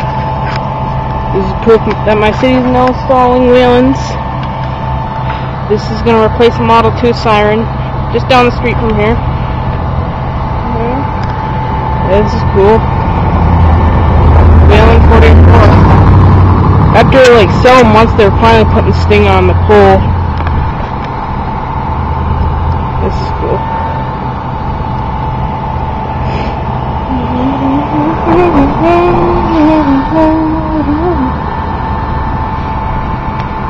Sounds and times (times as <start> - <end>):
Vehicle: 0.0 - 33.7
Speech: 10.7 - 11.1, 14.7 - 15.8, 17.0 - 20.0, 23.0 - 23.6.